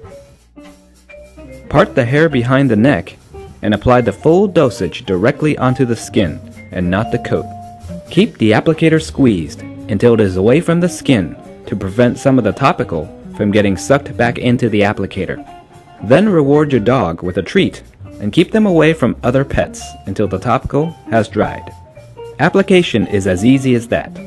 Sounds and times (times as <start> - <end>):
Music: 0.0 - 24.2
Speech: 1.7 - 7.5, 8.1 - 15.4, 16.0 - 21.8, 22.4 - 24.2.